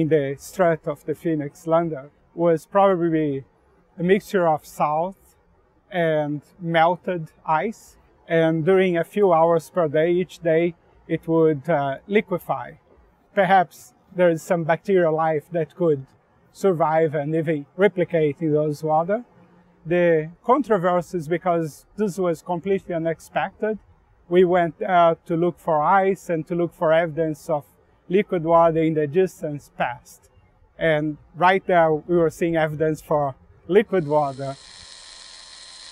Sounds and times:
Speech: 0:00.0 - 0:05.2, 0:05.9 - 0:12.8, 0:13.4 - 0:34.6.

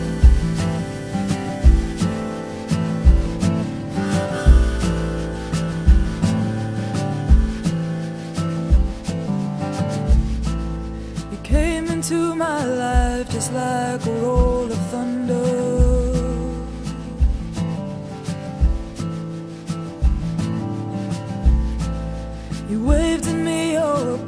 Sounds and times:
Music: 0:00.0 - 0:24.2.

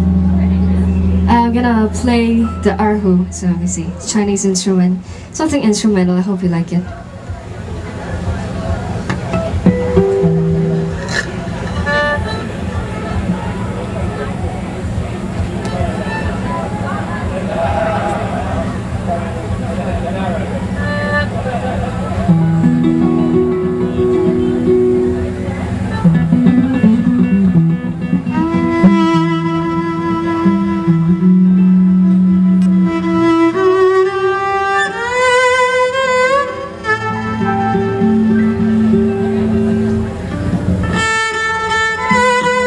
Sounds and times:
Violin, fiddle: 0:11.6 - 0:14.4, 0:15.6 - 0:17.3, 0:20.2 - 0:22.3, 0:28.3 - 0:39.5, 0:40.8 - 0:42.6.

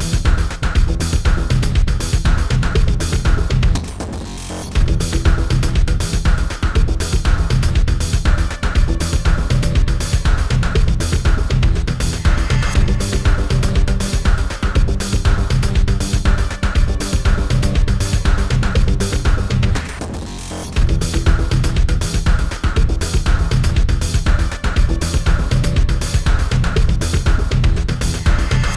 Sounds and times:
Music: 0:00.0 - 0:28.7.

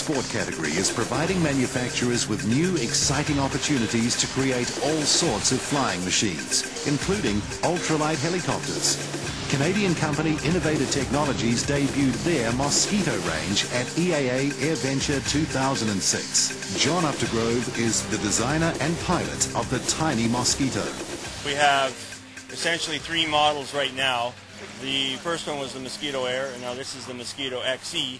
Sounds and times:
Music: 0:00.0 - 0:28.1
Speech: 0:00.0 - 0:28.1.

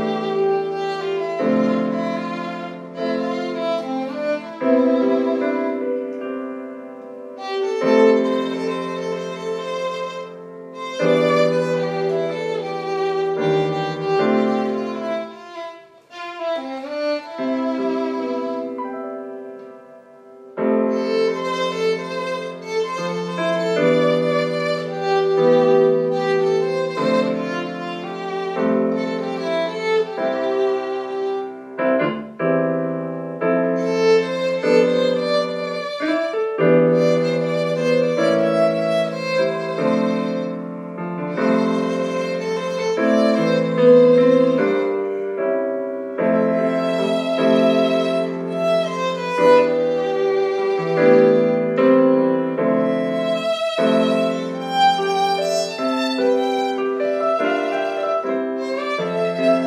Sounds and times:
Violin, fiddle: 0:00.0 - 0:06.4, 0:07.0 - 0:32.2, 0:33.4 - 0:59.6.

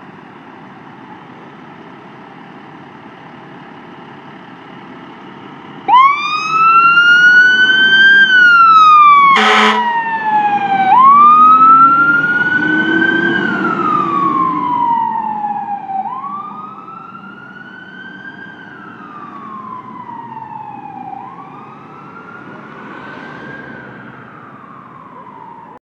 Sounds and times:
Car: 0:00.0 - 0:25.8
Fire engine, fire truck (siren): 0:00.0 - 0:25.8
Truck: 0:00.0 - 0:25.8.

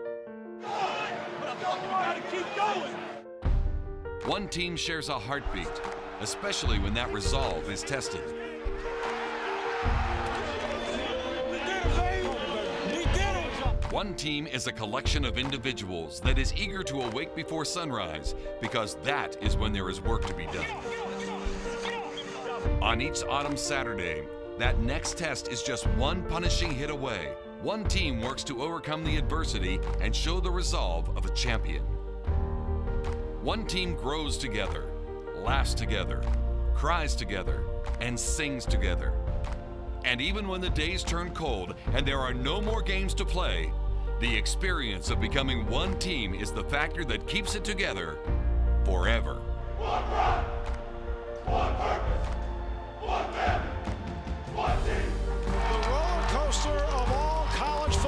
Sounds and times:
Music: 0:00.0 - 0:58.0
Speech: 0:04.3 - 0:08.3, 0:11.5 - 0:21.4, 0:22.8 - 0:31.8, 0:33.4 - 0:39.2, 0:40.1 - 0:48.2, 0:48.8 - 0:49.4.

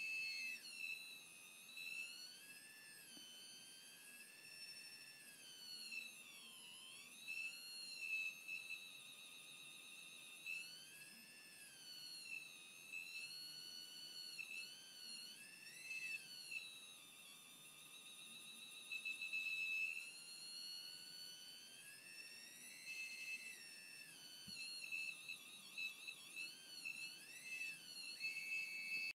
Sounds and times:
Buzzer: 0:00.0 - 0:29.1.

